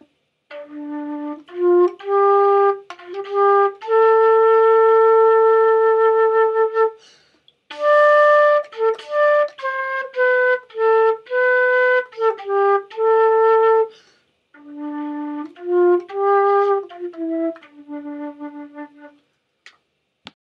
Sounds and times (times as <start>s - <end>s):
Flute: 0.0s - 14.0s, 14.6s - 19.3s.